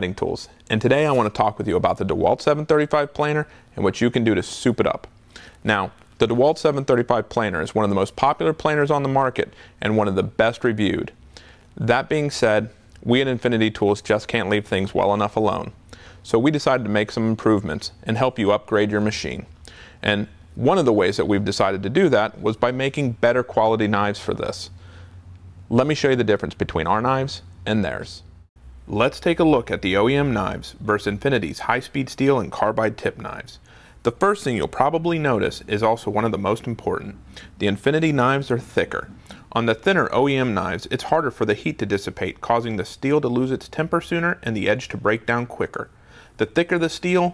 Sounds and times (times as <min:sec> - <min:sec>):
Speech: 0:00.0 - 0:11.2, 0:11.8 - 0:24.8, 0:25.7 - 0:28.3, 0:28.9 - 0:47.3.